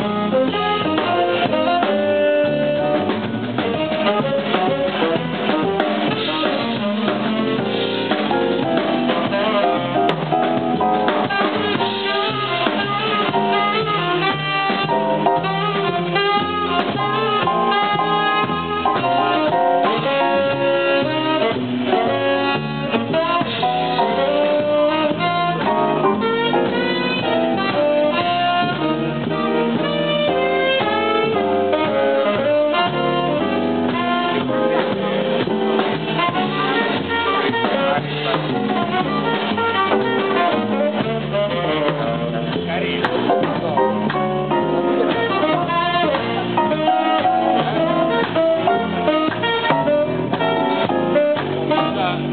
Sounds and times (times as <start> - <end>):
Bass drum: 0.0 - 52.3
Brass instrument: 0.0 - 52.3
Drum kit: 0.0 - 52.3
Drum roll: 0.0 - 52.3
Saxophone: 0.0 - 52.3
Rimshot: 2.8 - 52.3.